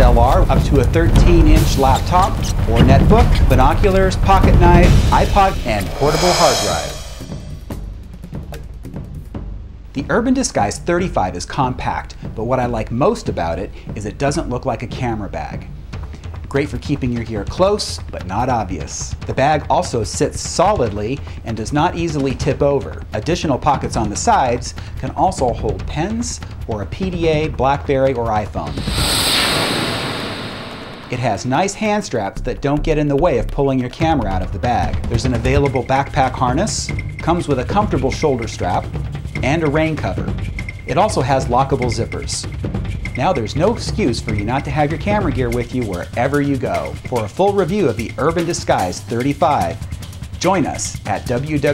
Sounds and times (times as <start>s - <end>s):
Speech: 0.0s - 7.2s, 10.0s - 15.7s, 16.5s - 28.9s, 31.1s - 49.8s, 50.4s - 51.7s
Music: 0.0s - 51.7s.